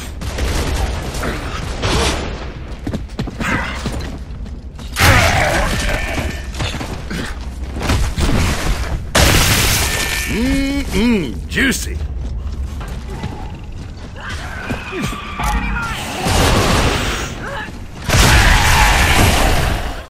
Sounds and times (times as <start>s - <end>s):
Speech: 10.3s - 12.0s.